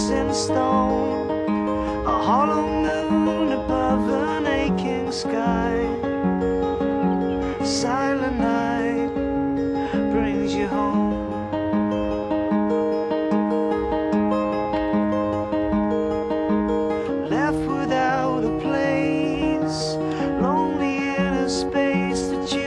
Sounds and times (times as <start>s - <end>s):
Music: 0.0s - 22.6s.